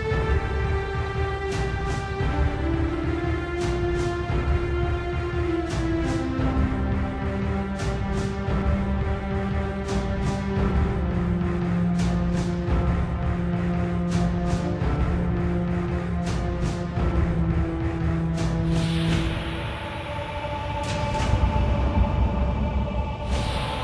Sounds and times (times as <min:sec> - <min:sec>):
Music: 0:00.0 - 0:23.8.